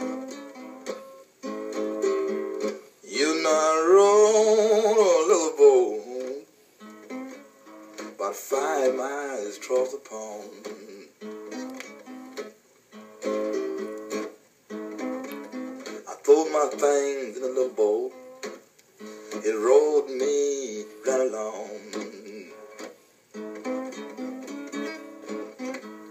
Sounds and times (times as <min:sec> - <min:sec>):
Music: 0:00.0 - 0:26.1.